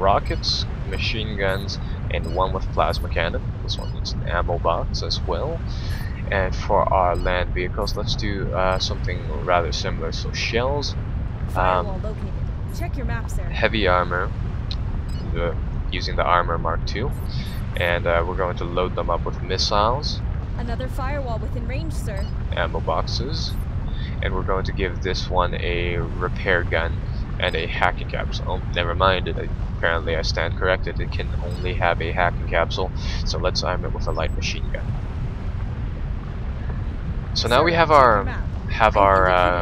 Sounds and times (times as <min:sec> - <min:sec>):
Speech: 0:00.0 - 0:10.9, 0:11.5 - 0:14.3, 0:15.2 - 0:34.8, 0:37.4 - 0:39.6.